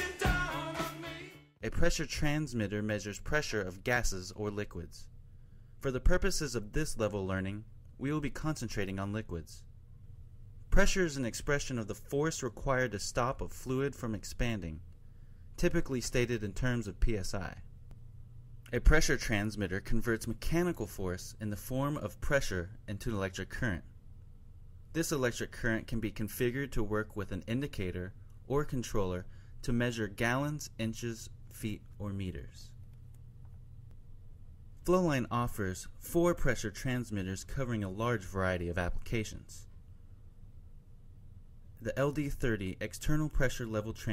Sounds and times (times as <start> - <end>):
Speech: 1.6 - 5.1, 5.8 - 9.7, 10.7 - 14.8, 15.6 - 17.7, 18.7 - 24.0, 24.9 - 32.8, 34.8 - 39.7, 41.8 - 44.1.